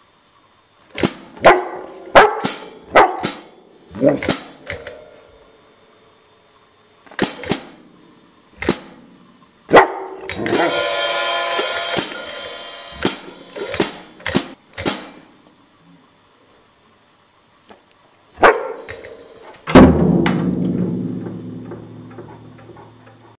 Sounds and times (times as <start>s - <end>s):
Bow-wow: 1.4s - 4.4s, 9.7s - 10.8s, 18.4s - 18.9s
Music: 10.4s - 14.6s, 18.9s - 23.3s.